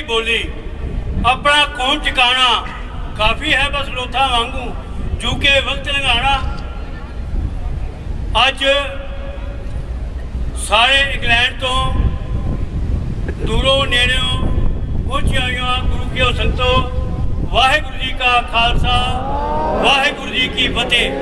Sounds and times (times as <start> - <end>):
Male speech, man speaking: 0.0 - 0.5, 1.3 - 6.6, 8.4 - 9.0, 10.6 - 12.0, 13.4 - 14.5, 15.1 - 16.9, 17.5 - 19.2, 19.9 - 21.2
Narration, monologue: 0.0 - 6.7, 10.4 - 12.3, 13.2 - 21.2.